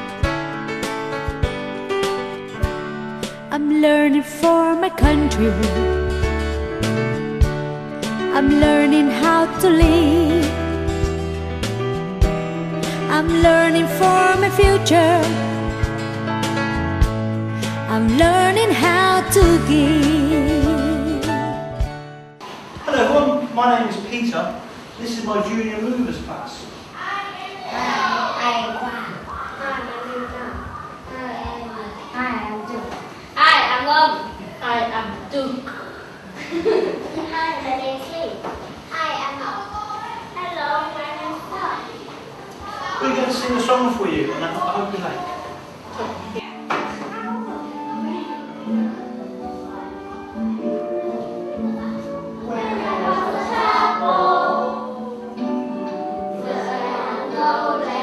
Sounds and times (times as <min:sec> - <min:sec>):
Music: 0:00.0 - 0:22.4, 0:45.8 - 0:58.0.